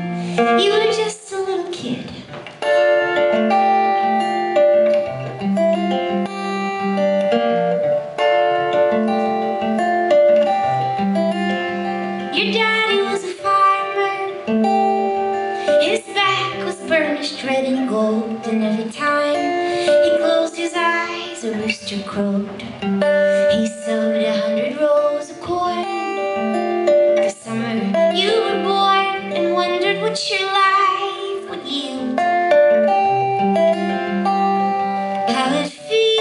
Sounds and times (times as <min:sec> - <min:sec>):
Inside, large room or hall: 0:00.0 - 0:36.2
Music: 0:00.0 - 0:36.2.